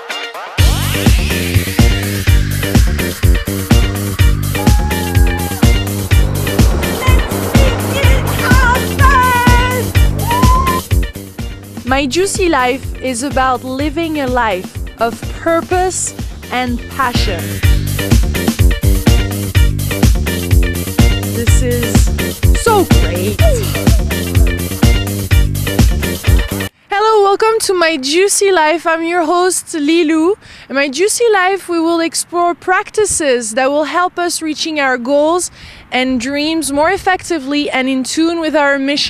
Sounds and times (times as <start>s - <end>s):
Music: 0.0s - 26.7s
Speech: 11.9s - 17.5s, 21.4s - 23.7s, 26.9s - 39.0s.